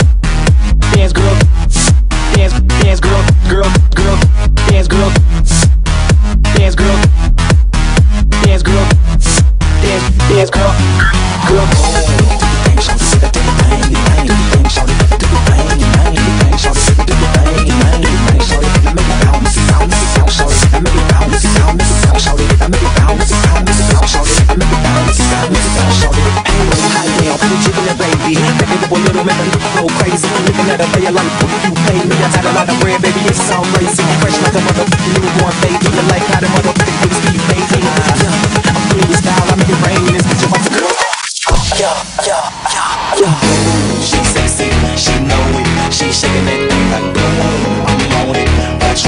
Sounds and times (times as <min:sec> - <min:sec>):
Dance music: 0:00.0 - 0:49.0.